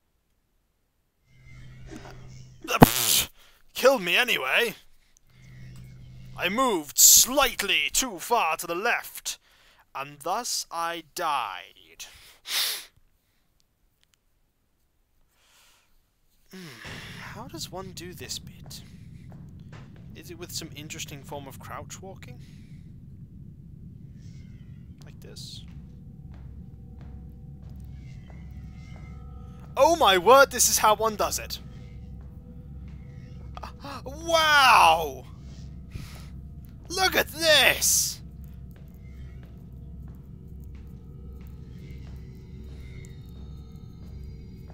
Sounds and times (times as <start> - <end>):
Speech: 2.7 - 4.8, 6.4 - 12.2, 16.6 - 18.9, 20.2 - 22.5, 25.0 - 25.6, 29.8 - 31.6, 33.6 - 35.3, 36.9 - 38.2.